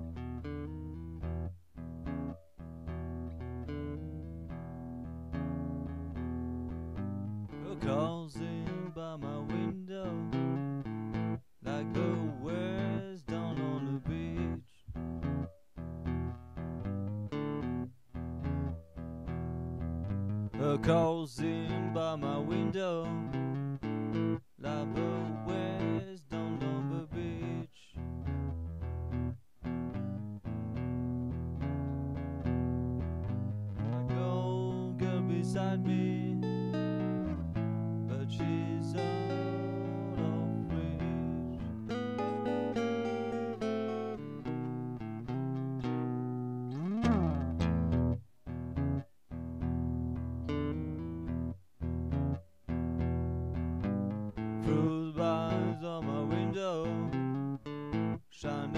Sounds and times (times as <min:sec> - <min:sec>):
Acoustic guitar: 0:00.0 - 0:58.7.